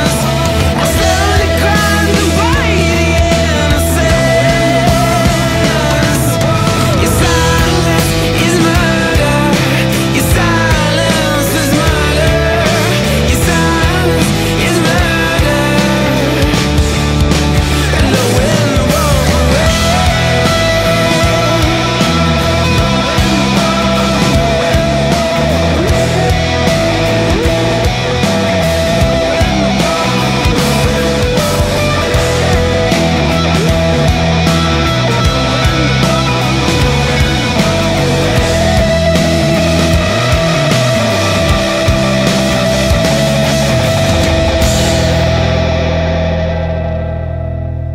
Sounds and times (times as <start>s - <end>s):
Grunge: 0.0s - 47.9s.